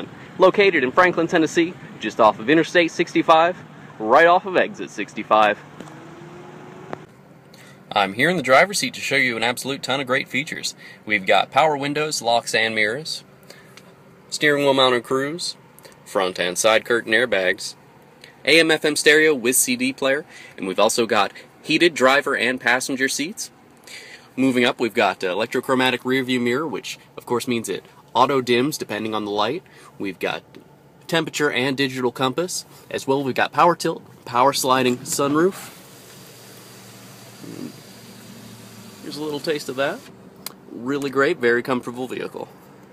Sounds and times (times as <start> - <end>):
Speech: 0.0 - 5.6, 7.9 - 13.3, 14.3 - 17.8, 18.4 - 23.6, 24.4 - 35.7, 39.0 - 40.1, 40.7 - 42.5.